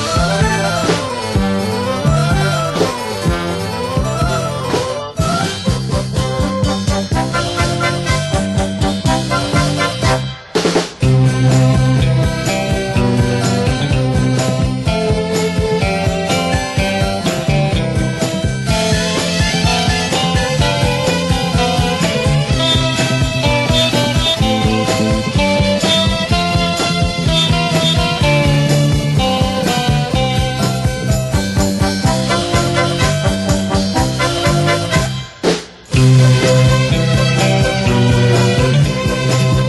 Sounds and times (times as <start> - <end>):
Swing music: 0.0 - 39.6.